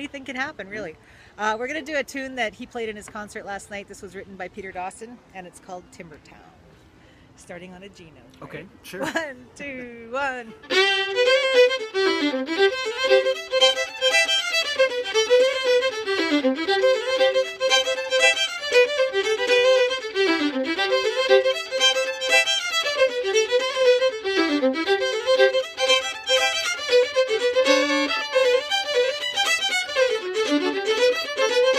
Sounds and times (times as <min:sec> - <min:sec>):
Violin, fiddle: 0:10.5 - 0:31.7.